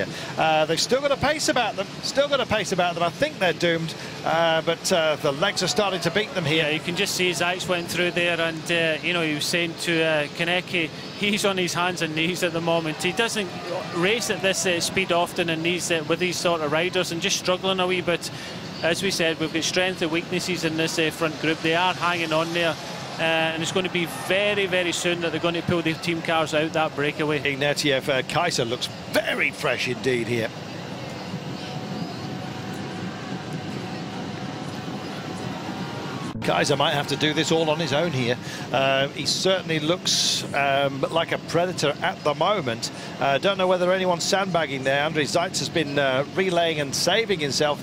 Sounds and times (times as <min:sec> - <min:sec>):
Speech: 0:00.0 - 0:30.5, 0:36.4 - 0:47.8.